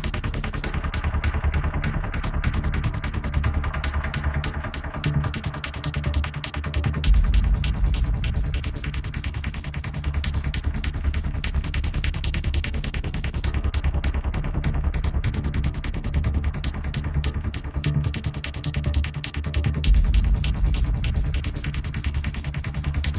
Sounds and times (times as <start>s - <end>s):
Music: 0.0s - 23.1s.